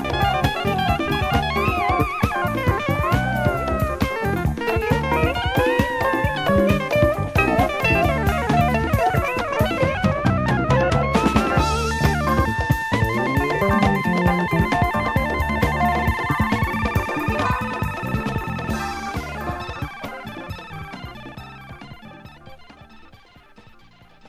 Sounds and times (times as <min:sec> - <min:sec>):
Music: 0:00.0 - 0:24.2.